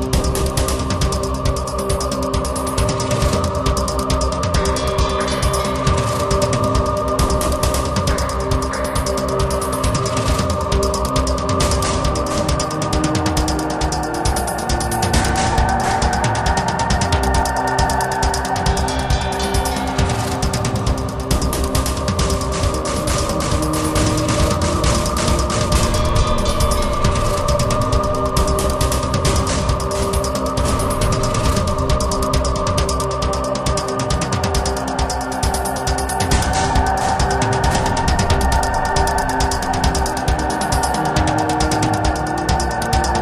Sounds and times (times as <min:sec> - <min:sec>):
Music: 0:00.0 - 0:43.2.